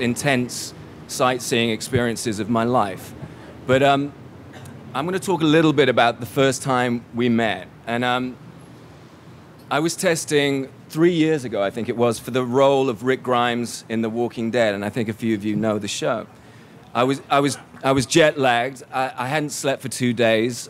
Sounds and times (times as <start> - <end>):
Male speech, man speaking: 0.0 - 3.1, 3.7 - 4.2, 5.0 - 8.4, 9.7 - 16.3, 16.9 - 20.6
Narration, monologue: 0.0 - 20.6.